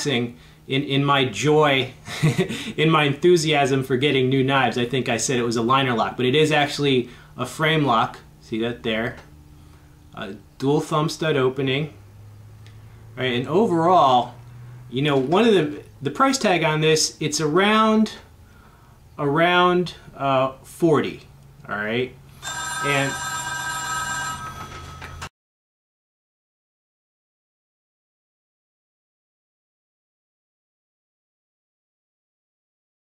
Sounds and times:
Speech: 0:00.0 - 0:02.0, 0:02.8 - 0:09.3, 0:10.2 - 0:12.0, 0:13.2 - 0:14.4, 0:15.0 - 0:18.3, 0:19.2 - 0:22.2, 0:22.8 - 0:23.2.

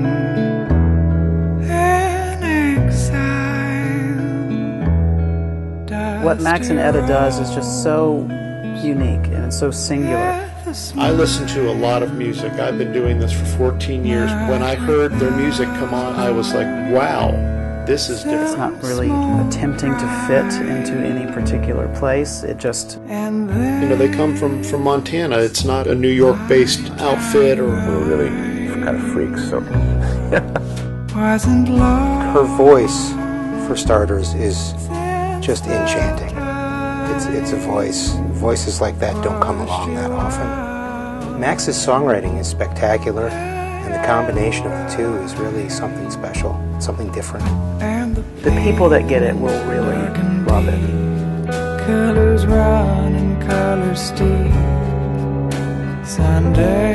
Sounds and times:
Music: 0:00.0 - 0:56.9
Speech: 0:05.9 - 0:23.0, 0:23.6 - 0:30.8, 0:31.4 - 0:36.4, 0:37.1 - 0:40.6, 0:41.2 - 0:47.5, 0:48.1 - 0:50.9.

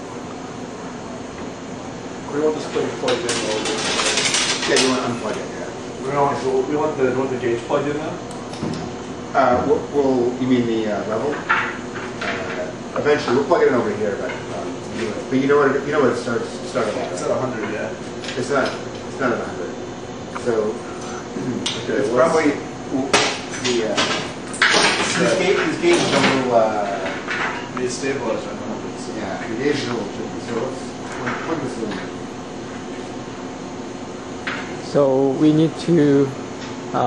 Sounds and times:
Speech: 0:02.3 - 0:03.9, 0:04.6 - 0:08.2, 0:09.3 - 0:11.5, 0:12.2 - 0:19.8, 0:21.4 - 0:24.2, 0:25.1 - 0:27.2, 0:27.8 - 0:32.1, 0:34.8 - 0:37.0.

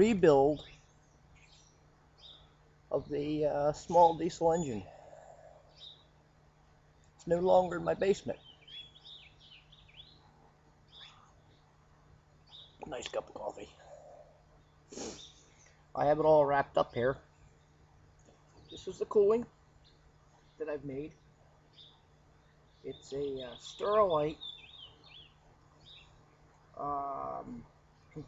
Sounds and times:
Speech: 0:00.0 - 0:00.6, 0:03.0 - 0:04.9, 0:07.2 - 0:08.4, 0:12.8 - 0:13.9, 0:16.0 - 0:17.2, 0:18.8 - 0:19.5, 0:20.6 - 0:21.2, 0:22.9 - 0:24.4, 0:26.8 - 0:28.2.

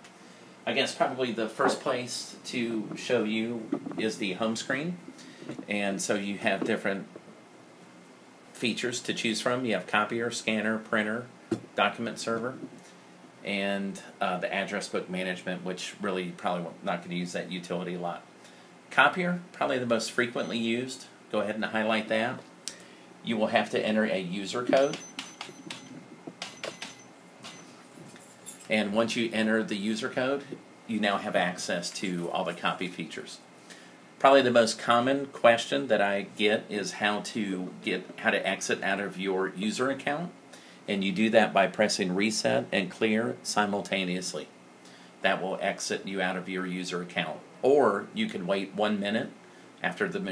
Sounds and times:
Speech: 0:00.6 - 0:05.0, 0:05.6 - 0:07.1, 0:08.5 - 0:12.7, 0:13.4 - 0:18.3, 0:18.9 - 0:22.5, 0:23.2 - 0:25.0, 0:28.7 - 0:33.4, 0:34.2 - 0:44.6, 0:45.2 - 0:50.3.

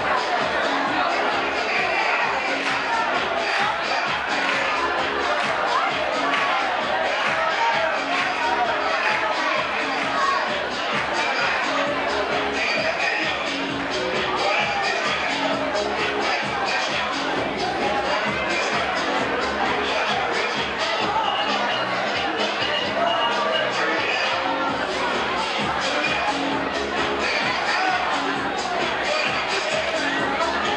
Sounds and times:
Dance music: 0:00.0 - 0:30.7
Speech: 0:00.0 - 0:30.7.

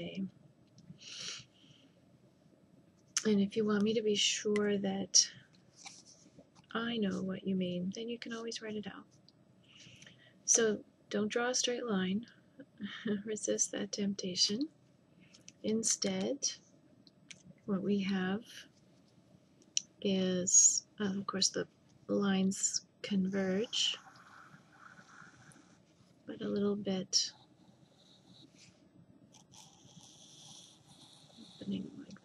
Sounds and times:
Speech: 0:00.0 - 0:00.3, 0:03.2 - 0:05.4, 0:06.7 - 0:09.0, 0:10.5 - 0:14.7, 0:15.6 - 0:16.6, 0:17.7 - 0:18.6, 0:19.8 - 0:24.0, 0:26.3 - 0:27.3, 0:31.6 - 0:32.2.

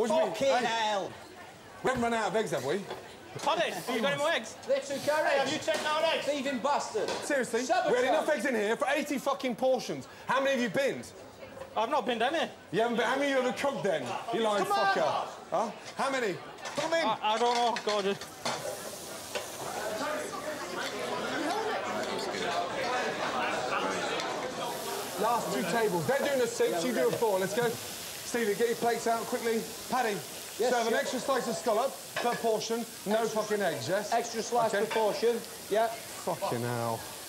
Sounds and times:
Sizzle: 0:01.8 - 0:10.3, 0:14.1 - 0:37.2.

